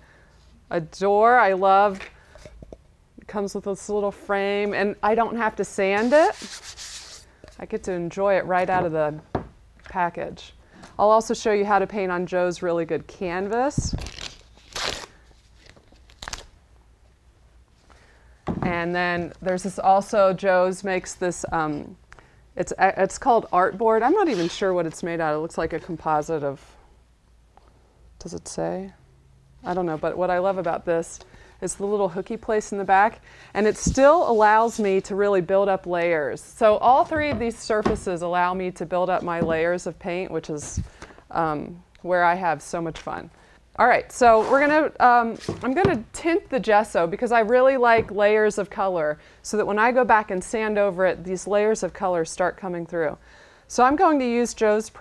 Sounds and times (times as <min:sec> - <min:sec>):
Tearing: 0:14.0 - 0:15.2.